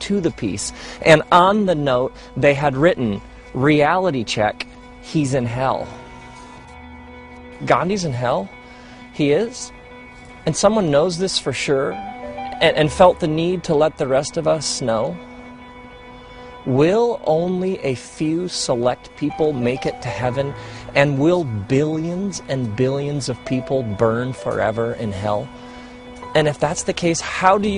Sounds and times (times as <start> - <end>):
Speech: 0.0 - 6.0, 7.6 - 8.5, 9.2 - 9.7, 10.5 - 15.2, 16.7 - 25.5, 26.4 - 27.7
Music: 0.0 - 27.7.